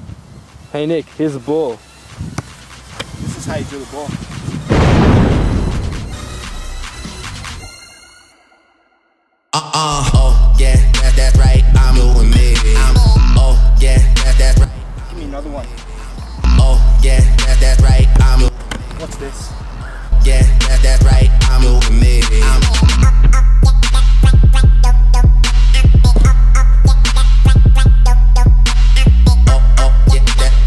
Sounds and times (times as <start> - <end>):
Music: 0.6 - 18.5, 19.5 - 30.6.